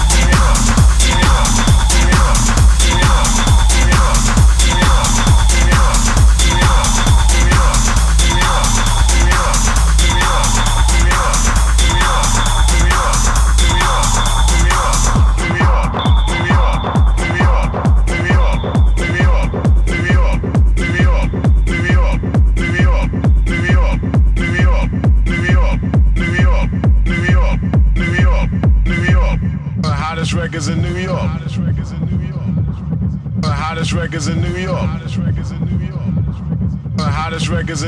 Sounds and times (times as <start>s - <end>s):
Music: 0.0s - 37.8s.